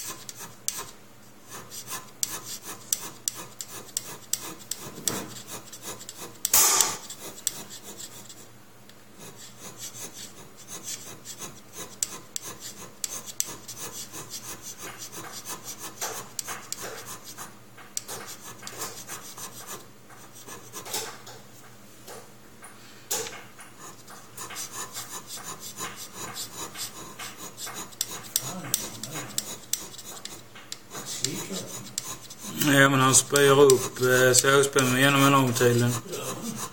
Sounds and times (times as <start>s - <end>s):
Filing (rasp): 0.0s - 8.5s, 9.2s - 21.4s, 23.2s - 36.7s
Rub: 0.0s - 8.5s, 9.2s - 21.3s, 23.7s - 36.7s.